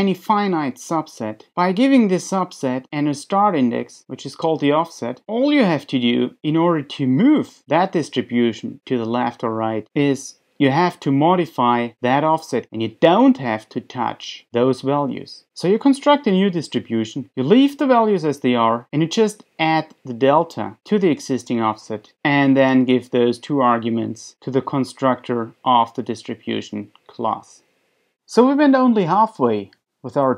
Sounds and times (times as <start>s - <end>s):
Speech: 0.0s - 27.7s, 28.3s - 30.3s.